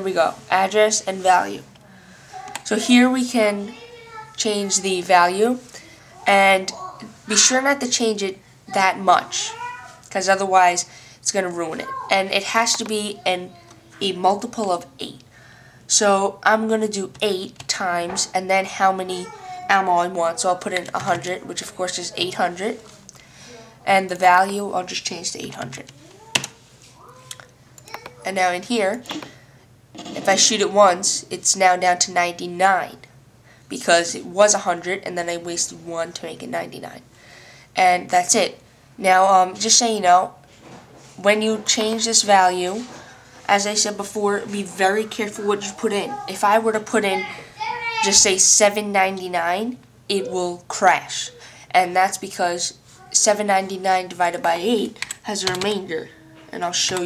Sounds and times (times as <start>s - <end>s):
Speech: 0.0s - 1.7s, 2.4s - 15.2s, 15.9s - 26.0s, 30.2s - 33.1s, 33.7s - 37.0s, 37.8s - 40.4s, 41.2s - 57.0s.